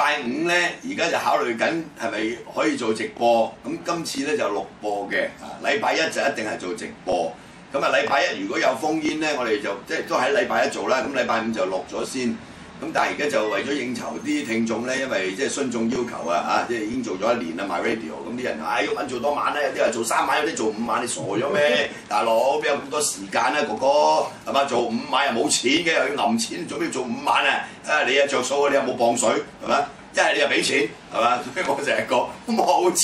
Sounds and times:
Speech: 0.0 - 33.0.

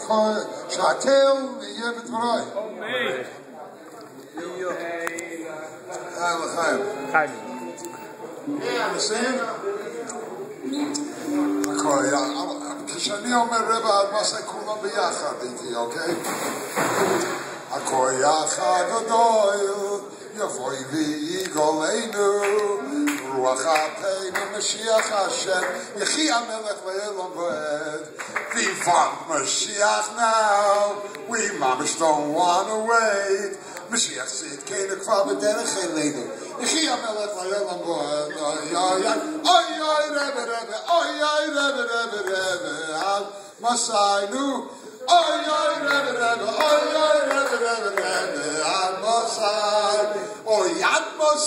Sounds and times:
Speech: 0.0 - 16.3, 28.6 - 41.6
Male singing: 10.8 - 14.4, 17.8 - 51.4.

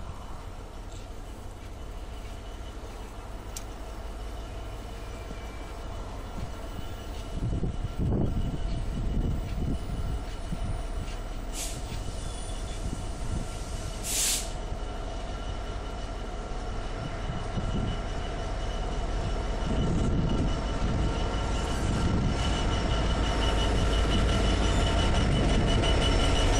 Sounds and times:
Outside, rural or natural: 0.0 - 26.6
Railroad car, train wagon: 0.0 - 26.6
Train: 0.0 - 26.6.

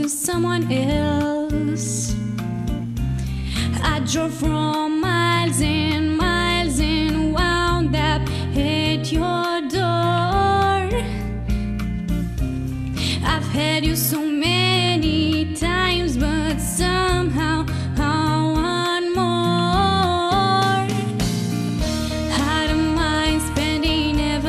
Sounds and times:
Soul music: 0.0 - 24.4.

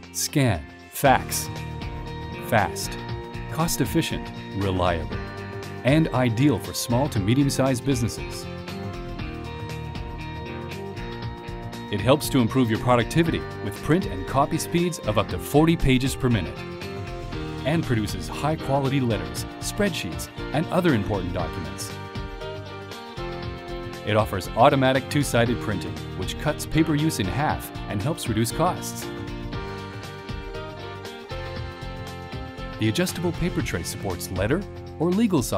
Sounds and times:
Music: 0.0 - 35.5
Speech: 0.2 - 1.5, 2.5 - 5.2, 5.8 - 8.5, 11.9 - 16.6, 17.6 - 22.0, 24.1 - 29.1, 32.8 - 35.5.

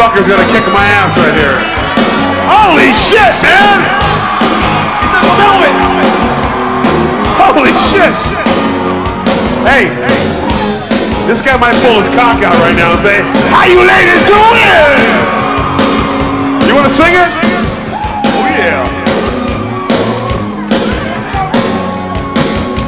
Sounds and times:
Speech: 0.0 - 1.6, 11.3 - 15.2
Music: 0.0 - 22.8.

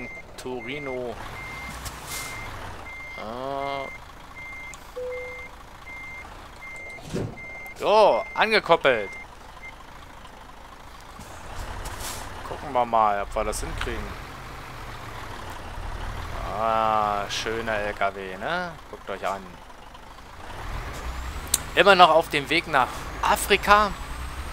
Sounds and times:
Speech: 7.8 - 9.1, 12.5 - 14.2, 16.4 - 19.6, 21.8 - 24.0.

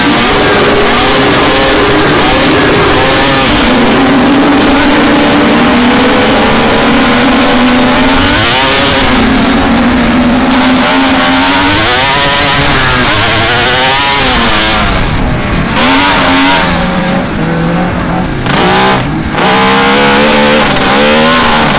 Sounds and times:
Accelerating, revving, vroom: 0.0 - 21.7
Vehicle: 0.0 - 21.7.

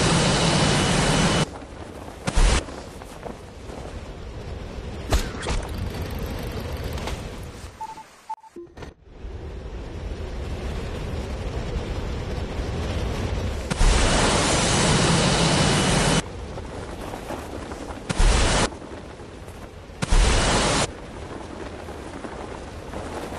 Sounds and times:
Outside, rural or natural: 0.0 - 23.3.

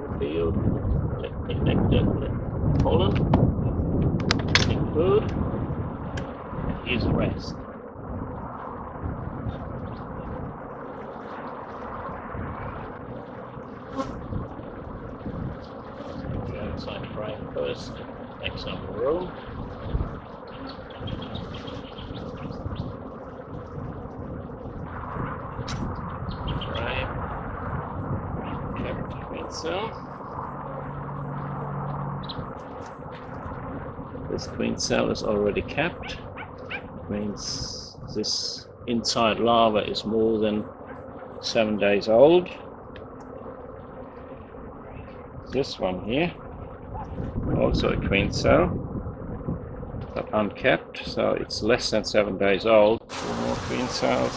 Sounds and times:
Bee, wasp, etc.: 8.6 - 54.3
Fly, housefly: 9.4 - 33.5, 34.2 - 48.6.

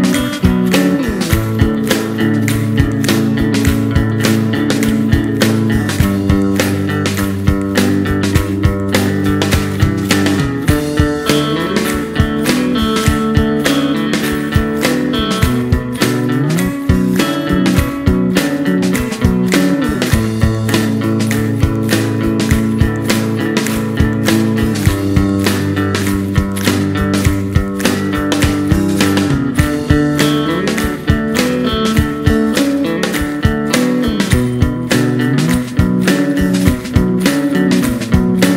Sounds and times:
Music: 0.0 - 38.5.

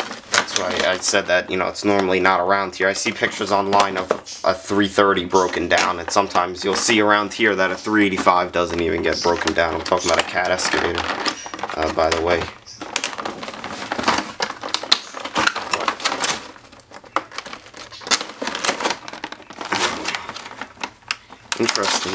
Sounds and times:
Speech: 0.4 - 12.6, 21.6 - 22.1.

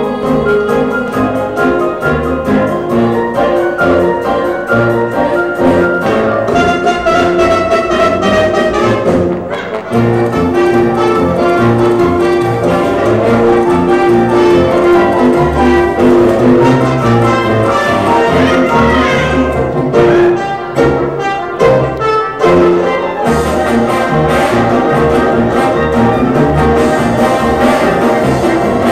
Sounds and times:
Music: 0.0 - 28.9.

